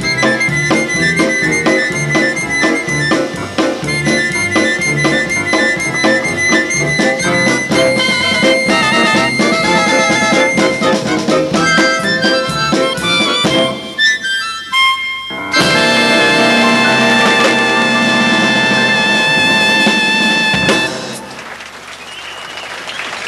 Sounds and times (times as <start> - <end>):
Musical instrument: 0.0 - 21.4
Blues: 0.0 - 23.2.